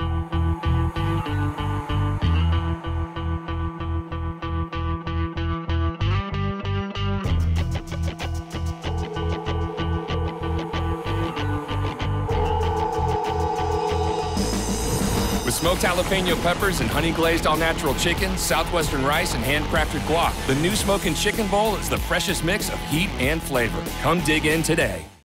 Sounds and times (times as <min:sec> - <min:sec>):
Music: 0:00.0 - 0:25.2
Speech: 0:15.5 - 0:25.2.